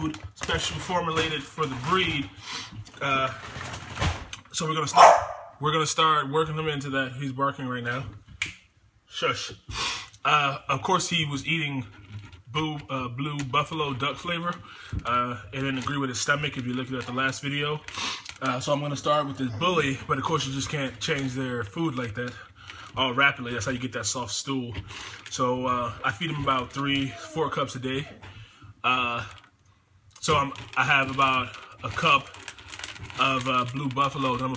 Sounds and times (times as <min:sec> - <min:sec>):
Speech: 0:00.0 - 0:02.4, 0:03.0 - 0:03.5, 0:04.4 - 0:08.2, 0:09.1 - 0:09.6, 0:10.2 - 0:29.4, 0:30.2 - 0:32.4, 0:33.1 - 0:34.5
Bow-wow: 0:05.0 - 0:05.6.